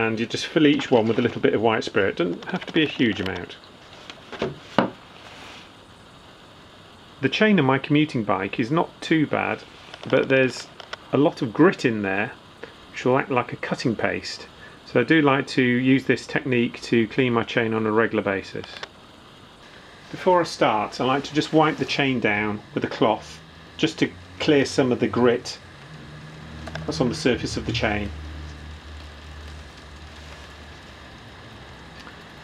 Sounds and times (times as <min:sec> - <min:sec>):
Speech: 0:00.0 - 0:03.6, 0:07.2 - 0:18.9, 0:20.1 - 0:25.6, 0:26.8 - 0:28.2.